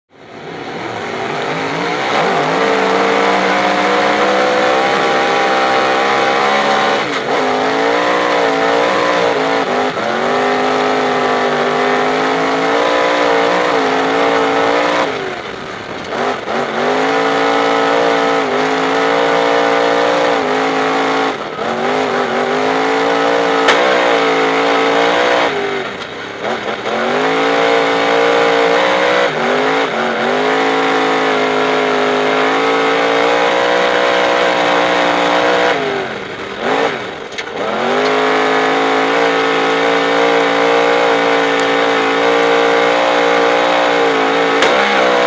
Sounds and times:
Race car, auto racing: 0:00.0 - 0:45.2.

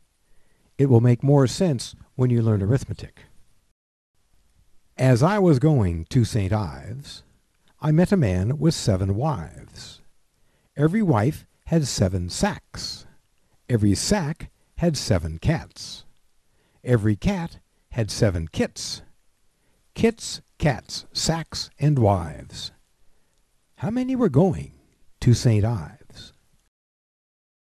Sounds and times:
Speech: 0:00.8 - 0:03.3, 0:05.0 - 0:10.1, 0:10.8 - 0:16.1, 0:16.8 - 0:19.2, 0:20.0 - 0:22.8, 0:23.8 - 0:26.4.

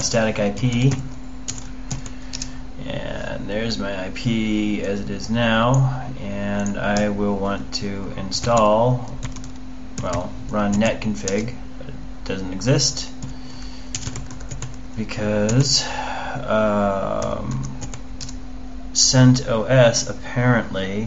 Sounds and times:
Speech: 0:00.0 - 0:01.1, 0:02.8 - 0:09.2, 0:10.0 - 0:13.2, 0:15.0 - 0:17.8, 0:18.9 - 0:21.0
Computer keyboard: 0:00.8 - 0:02.5, 0:08.4 - 0:11.5, 0:13.9 - 0:14.8, 0:17.2 - 0:18.4.

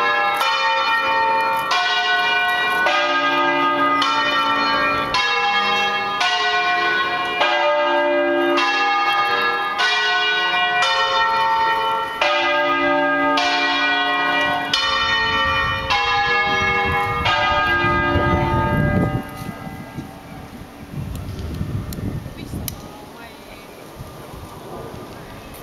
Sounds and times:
Bell: 0:00.0 - 0:20.2.

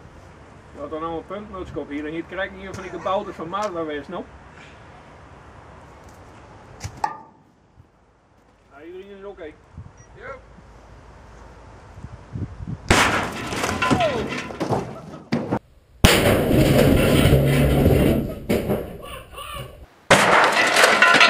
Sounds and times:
Speech: 0:00.8 - 0:04.3, 0:08.7 - 0:09.6, 0:10.2 - 0:10.4.

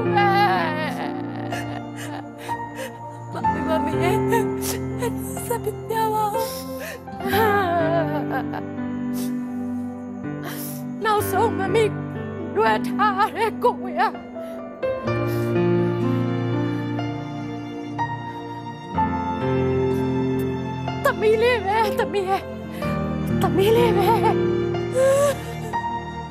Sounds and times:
Sad music: 0:00.0 - 0:26.3.

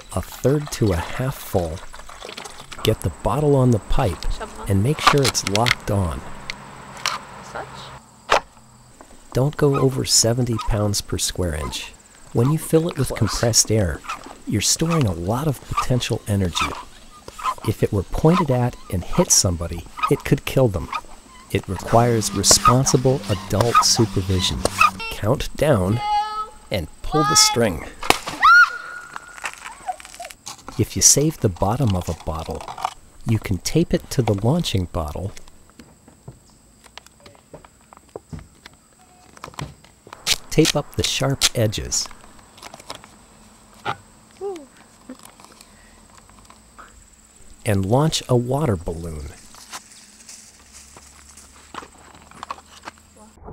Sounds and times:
Speech: 0:00.1 - 0:01.8, 0:02.8 - 0:06.3, 0:09.4 - 0:16.8, 0:17.6 - 0:28.0, 0:30.8 - 0:32.7, 0:33.3 - 0:35.4, 0:40.5 - 0:42.1, 0:47.7 - 0:49.4.

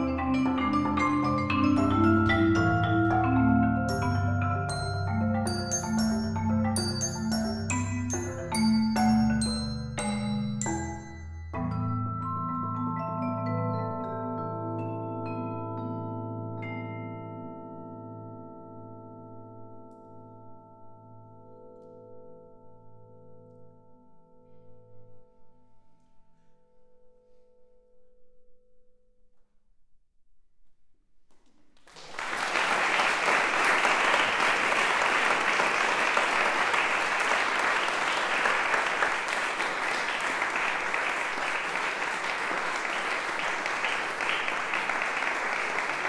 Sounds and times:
Marimba, xylophone: 0:00.0 - 0:25.5
Vibraphone: 0:00.0 - 0:26.4.

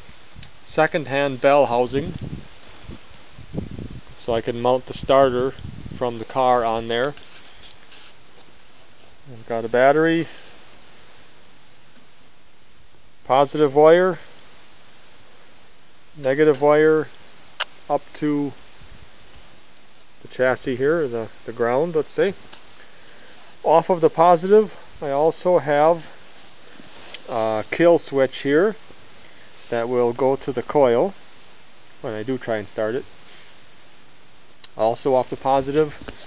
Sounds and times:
Speech: 0:00.7 - 0:02.2, 0:04.2 - 0:07.2, 0:09.3 - 0:10.4, 0:13.3 - 0:14.3, 0:16.2 - 0:17.2, 0:17.9 - 0:18.6, 0:20.2 - 0:22.4, 0:23.6 - 0:26.2, 0:27.3 - 0:28.8, 0:29.7 - 0:31.2, 0:32.0 - 0:33.1, 0:34.8 - 0:36.1.

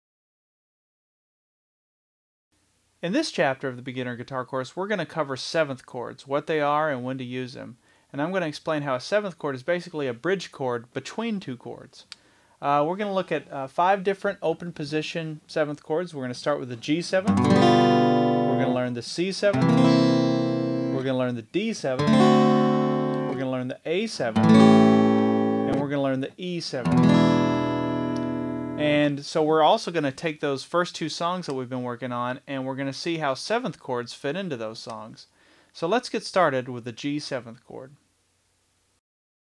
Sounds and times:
Speech: 0:03.0 - 0:17.4, 0:18.6 - 0:19.7, 0:20.9 - 0:22.0, 0:23.3 - 0:24.4, 0:25.7 - 0:26.9, 0:28.8 - 0:38.0
Guitar: 0:16.8 - 0:29.2.

